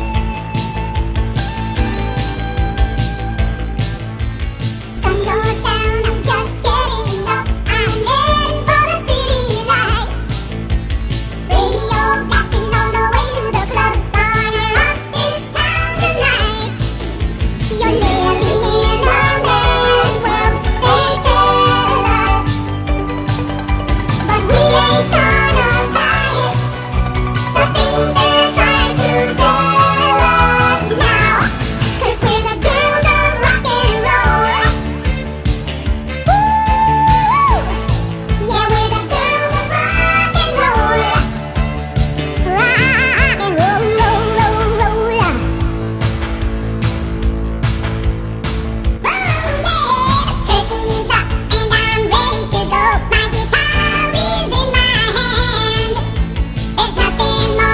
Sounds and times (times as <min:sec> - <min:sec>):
Music: 0:00.0 - 0:57.7.